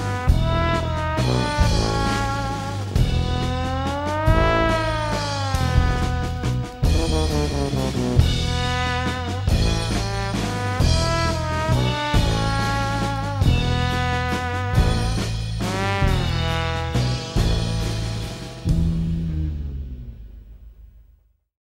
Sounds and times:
Music: 0.0 - 21.4.

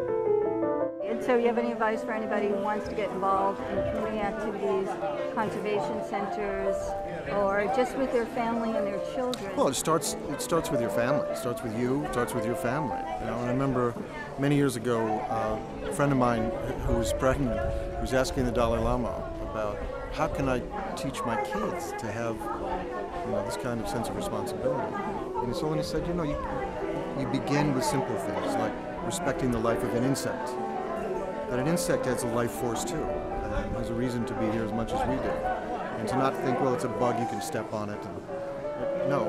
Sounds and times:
Music: 0.0 - 39.2.

